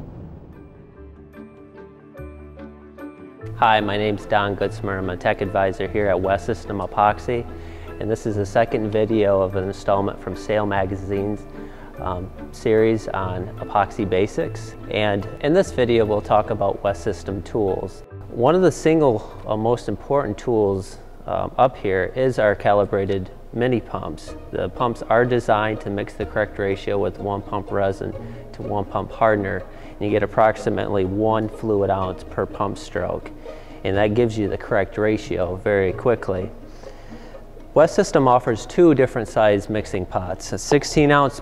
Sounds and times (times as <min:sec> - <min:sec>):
Music: 0:00.0 - 0:41.4
Speech: 0:03.6 - 0:11.4, 0:12.0 - 0:36.5, 0:37.8 - 0:41.4.